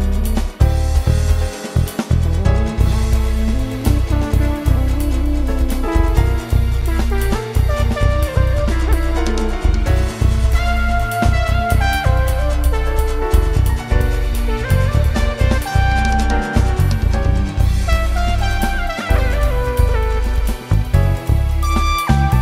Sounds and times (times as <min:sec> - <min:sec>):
Strum: 0:00.0 - 0:22.4.